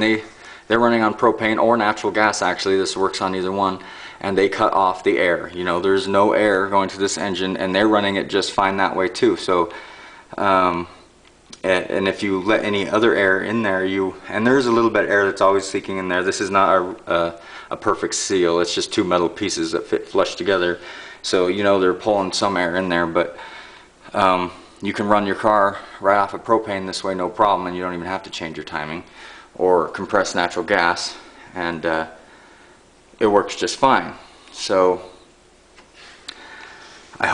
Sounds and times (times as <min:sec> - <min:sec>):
Speech: 0:00.0 - 0:23.4, 0:24.1 - 0:32.2, 0:33.2 - 0:35.2.